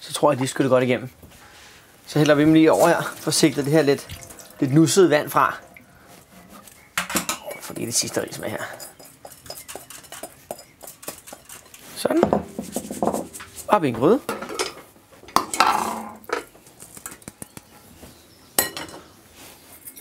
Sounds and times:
Speech: 0.0s - 1.1s, 2.1s - 5.6s, 7.5s - 8.8s, 13.7s - 14.3s.

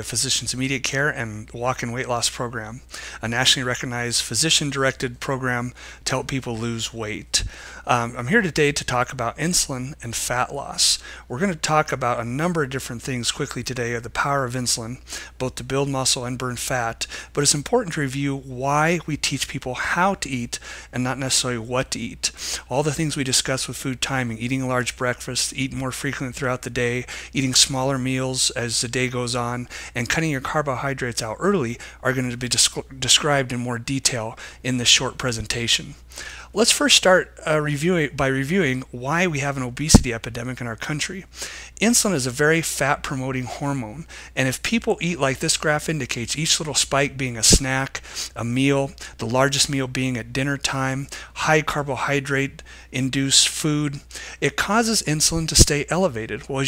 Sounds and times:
Speech: 0.0s - 56.6s.

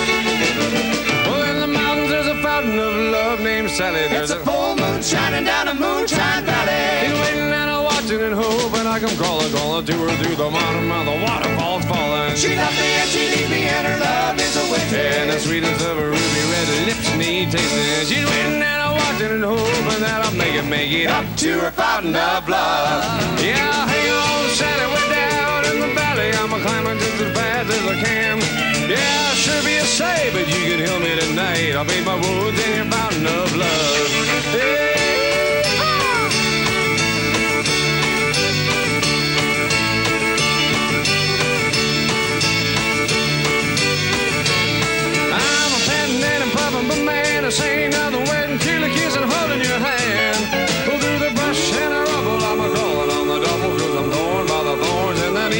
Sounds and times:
Music: 0.0s - 55.5s.

